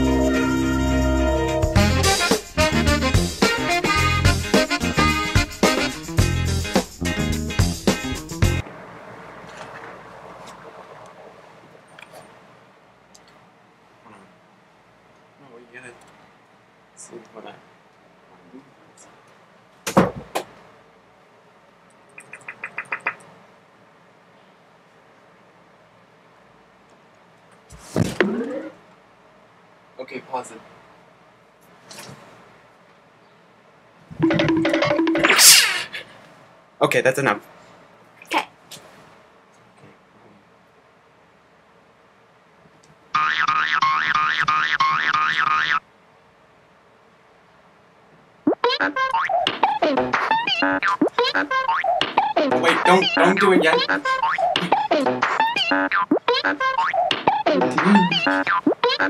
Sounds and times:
Speech: 0:15.4 - 0:16.0, 0:17.0 - 0:17.6, 0:30.0 - 0:30.7, 0:36.8 - 0:37.5, 0:52.6 - 0:53.9.

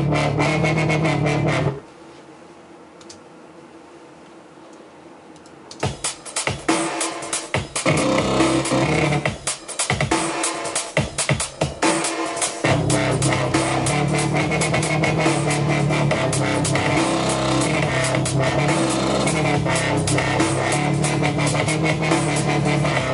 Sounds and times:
Dubstep: 0:00.0 - 0:01.8, 0:05.8 - 0:23.1.

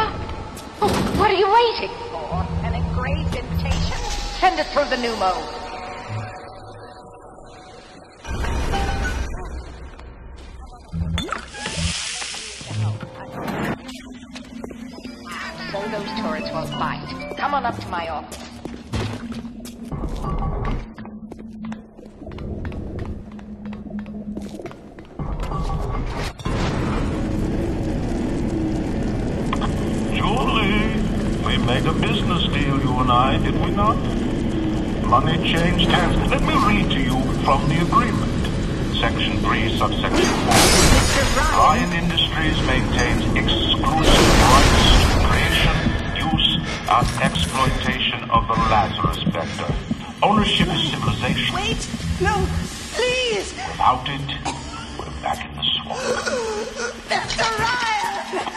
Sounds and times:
Music: 0:02.3 - 0:26.5.

